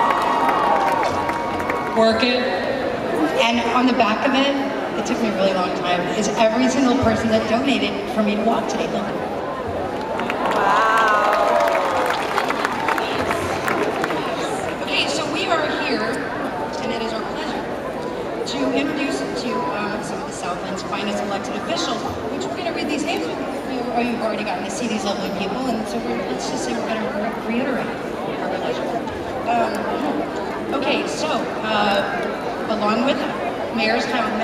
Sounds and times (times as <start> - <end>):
Speech: 2.0 - 9.2, 13.0 - 17.7, 18.4 - 34.4.